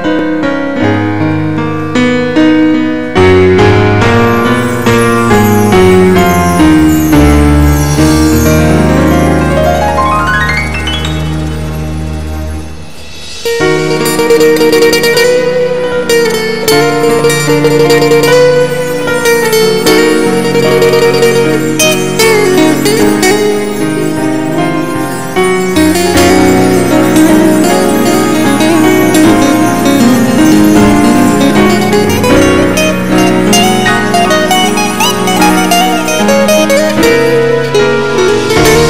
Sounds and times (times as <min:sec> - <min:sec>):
Musical instrument: 0:00.0 - 0:38.8.